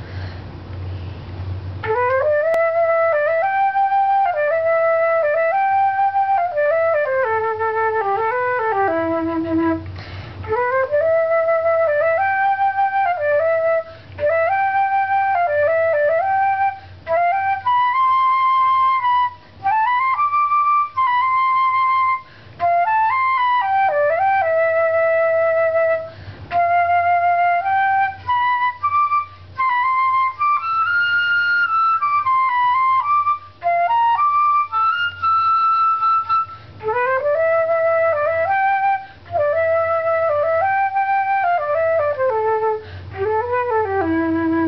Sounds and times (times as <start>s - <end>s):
Flute: 1.7s - 44.6s.